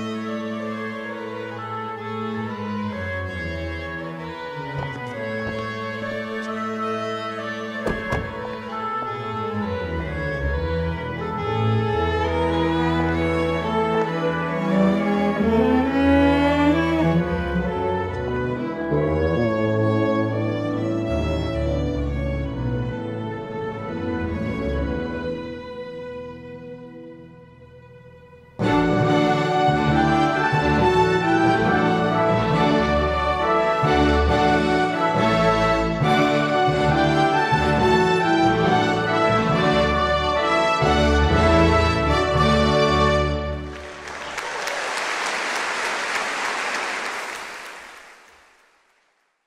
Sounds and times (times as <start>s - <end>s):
Music: 0.0s - 47.4s.